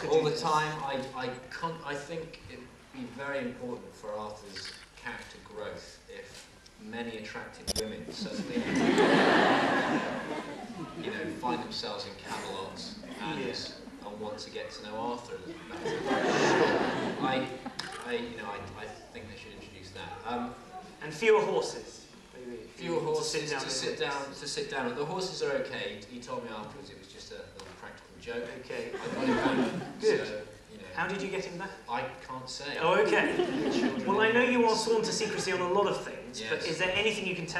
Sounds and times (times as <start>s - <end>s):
Speech: 0.0s - 8.8s, 11.0s - 16.0s, 17.2s - 37.5s.